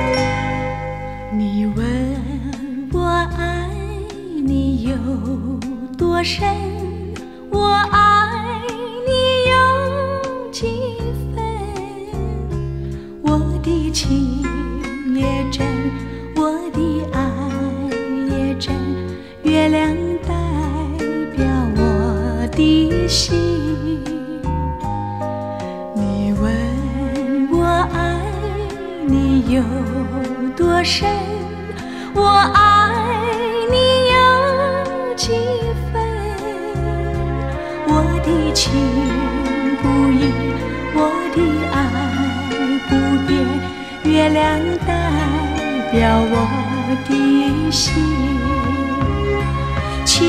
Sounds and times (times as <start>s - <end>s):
Lullaby: 0.0s - 12.2s, 13.1s - 49.2s.